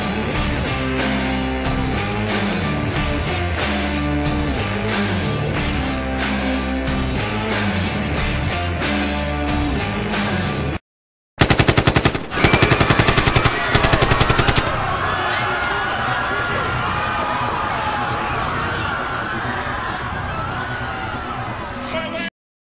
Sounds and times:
Speech: 21.8 - 22.3.

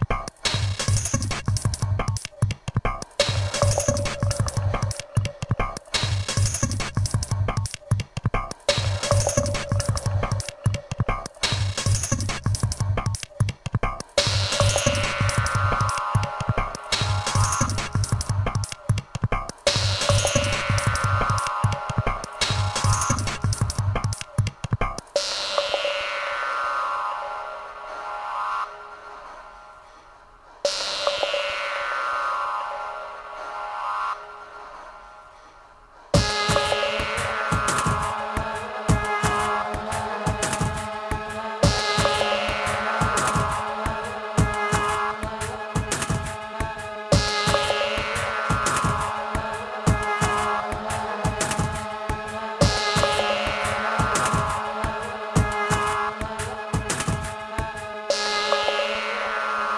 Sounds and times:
Music: 0.0 - 59.7.

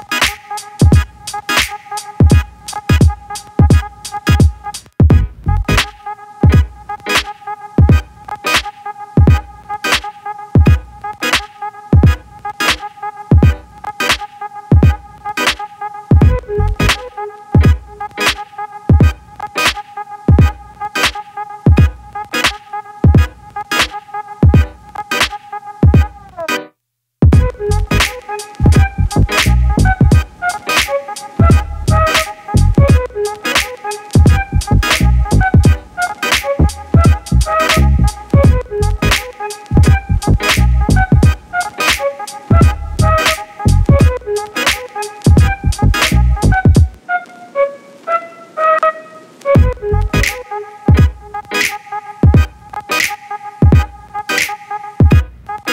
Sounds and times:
Music: 0.0 - 55.7.

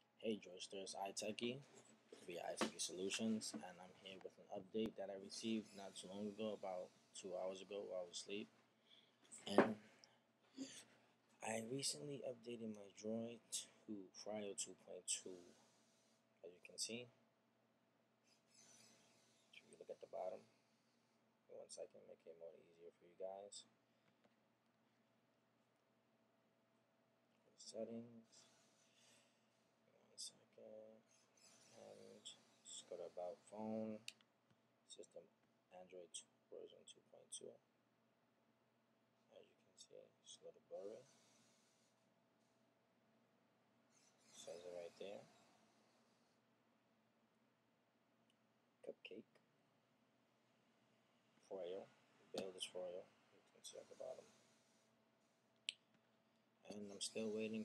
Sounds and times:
Speech: 0.2 - 8.5, 9.4 - 9.8, 11.4 - 15.6, 16.4 - 17.2, 19.6 - 20.5, 21.5 - 23.7, 27.5 - 28.4, 29.9 - 31.0, 31.8 - 34.1, 34.9 - 37.6, 39.3 - 41.1, 44.4 - 45.3, 48.8 - 49.4, 51.4 - 54.3, 56.7 - 57.6.

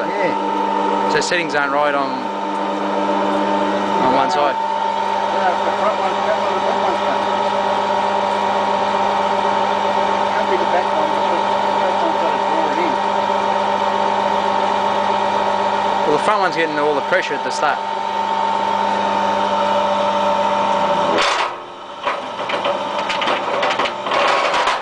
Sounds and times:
Speech: 1.1 - 2.2, 4.0 - 4.6, 5.4 - 7.3, 10.3 - 13.0, 16.0 - 17.8.

